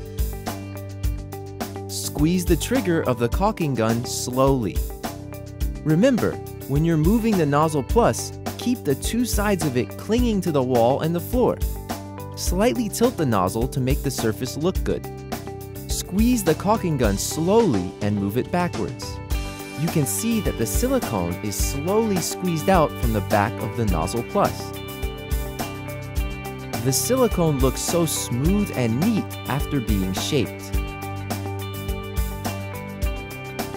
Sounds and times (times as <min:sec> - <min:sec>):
Music: 0:00.0 - 0:33.7
Speech: 0:01.9 - 0:04.8, 0:05.9 - 0:11.6, 0:12.4 - 0:15.0, 0:15.9 - 0:19.2, 0:19.8 - 0:24.7, 0:26.8 - 0:30.8.